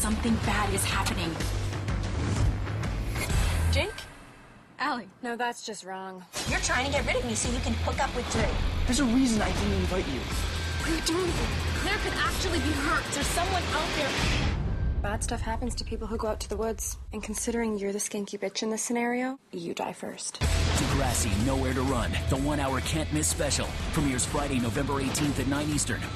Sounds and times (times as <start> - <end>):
Music: 0.0 - 4.5, 6.3 - 16.2, 20.4 - 26.1.